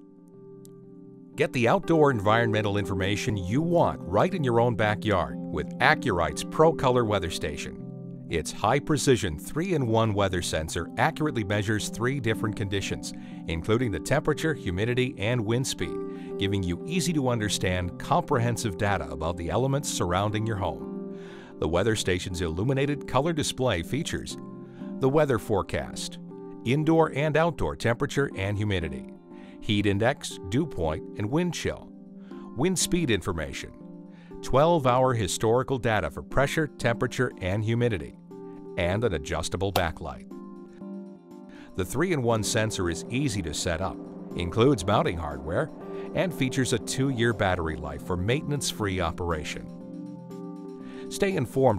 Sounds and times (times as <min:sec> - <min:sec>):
Music: 0:00.0 - 0:51.7
Speech: 0:01.4 - 0:20.8, 0:21.6 - 0:24.4, 0:25.0 - 0:31.9, 0:32.6 - 0:33.8, 0:34.4 - 0:38.2, 0:38.8 - 0:40.2, 0:41.8 - 0:49.7, 0:51.1 - 0:51.7.